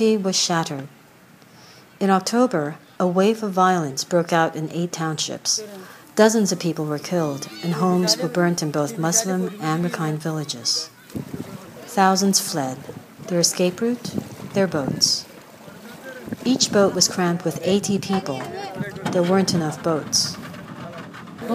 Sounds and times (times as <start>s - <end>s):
Boat, Water vehicle: 0.0s - 21.5s
Speech: 2.0s - 15.3s, 15.9s - 21.5s.